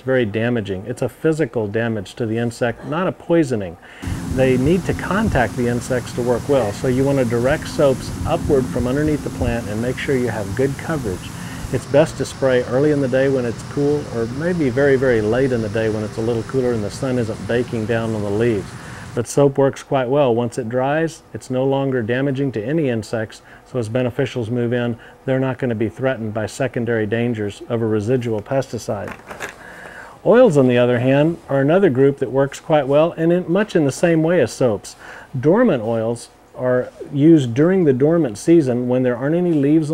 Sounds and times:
Speech: 0.0 - 29.2, 30.2 - 39.9.

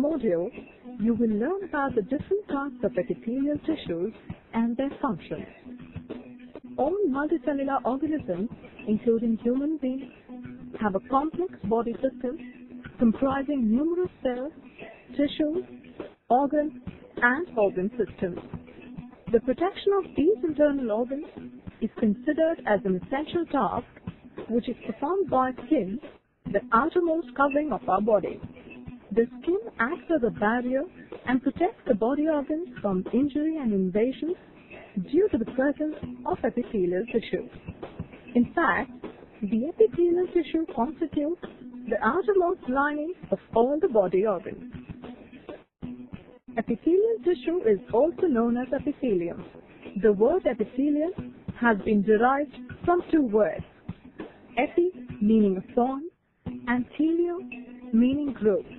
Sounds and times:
Speech: 0.0 - 5.5, 6.8 - 10.1, 10.8 - 12.4, 13.0 - 14.5, 15.1 - 15.6, 16.3 - 18.4, 19.3 - 23.9, 24.5 - 28.4, 29.1 - 34.4, 35.0 - 37.5, 38.4 - 44.6, 46.6 - 49.4, 50.0 - 53.7, 54.6 - 56.1, 56.7 - 58.7
Music: 0.0 - 58.7.

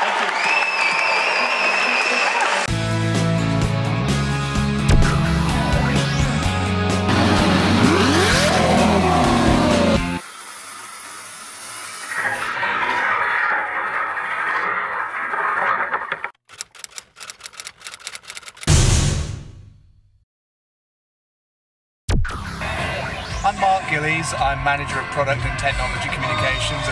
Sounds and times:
Music: 2.2 - 10.2, 22.2 - 26.9
Outside, rural or natural: 7.1 - 18.7
Speech: 22.7 - 26.9.

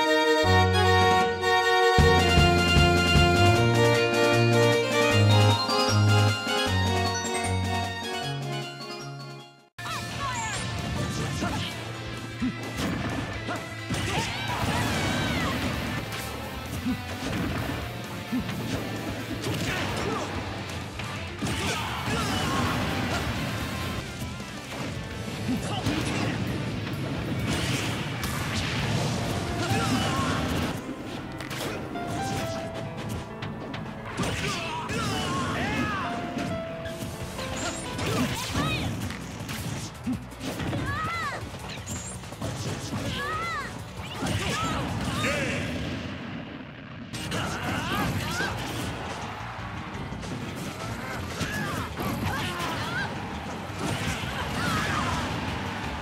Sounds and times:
Music: 0.0 - 45.5, 47.2 - 56.0
Smash, crash: 10.1 - 33.2, 34.1 - 46.3, 47.1 - 56.0.

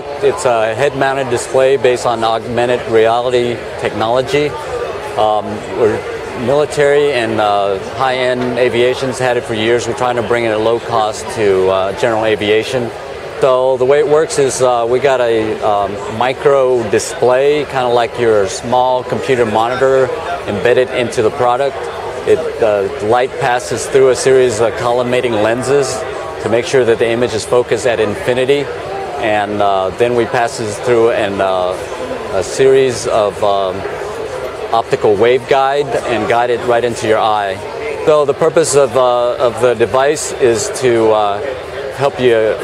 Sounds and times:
Speech: 0.0 - 42.6.

